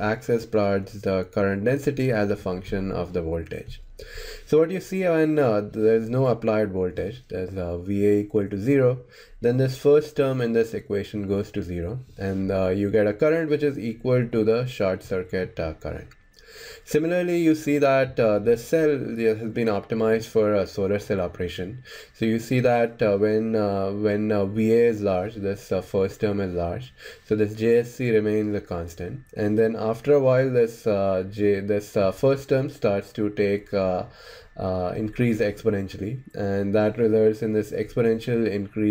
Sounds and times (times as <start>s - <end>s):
Speech: 0.0s - 3.8s, 4.5s - 16.2s, 16.9s - 38.9s.